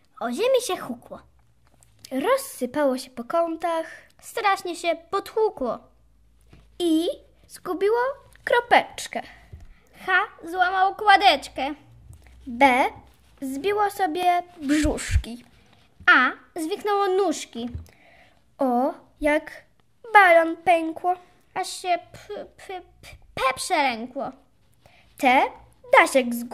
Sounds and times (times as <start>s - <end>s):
Speech: 0.2s - 1.3s, 2.0s - 5.9s, 6.8s - 9.4s, 10.0s - 11.8s, 12.4s - 17.8s, 18.6s - 24.5s, 25.2s - 26.5s.